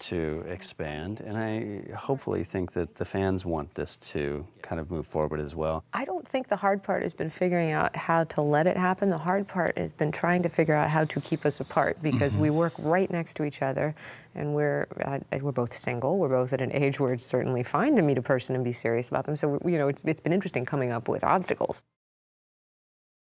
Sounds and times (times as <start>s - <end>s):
Speech: 0.0s - 10.8s, 11.8s - 13.7s, 14.4s - 21.9s.